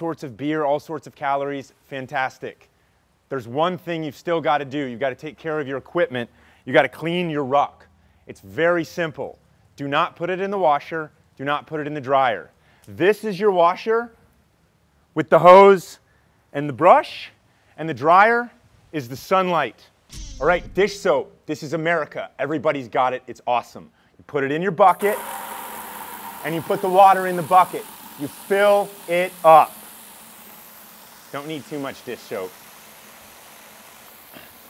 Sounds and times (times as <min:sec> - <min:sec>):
Speech: 0:00.0 - 0:02.7, 0:03.3 - 0:14.2, 0:15.2 - 0:16.0, 0:16.6 - 0:25.2, 0:26.4 - 0:29.8, 0:31.3 - 0:32.5.